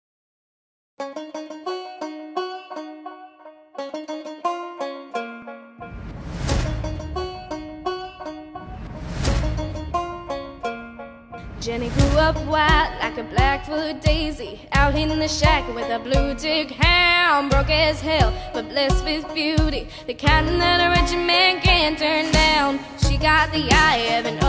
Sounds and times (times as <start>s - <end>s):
Music: 1.0s - 24.4s.